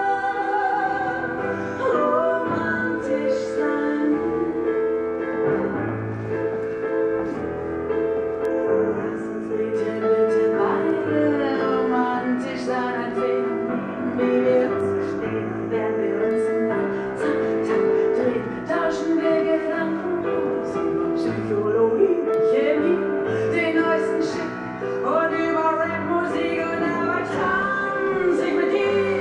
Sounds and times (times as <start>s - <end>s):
Classical music: 0.0s - 29.2s.